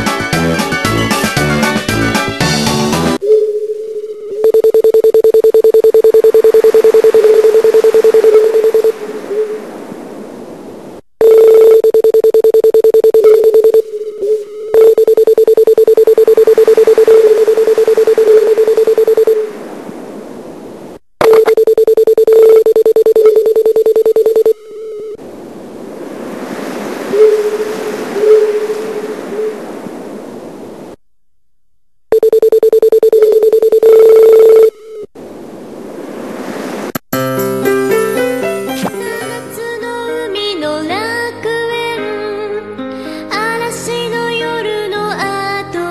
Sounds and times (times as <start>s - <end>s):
Music: 0.0s - 3.2s, 37.2s - 45.9s.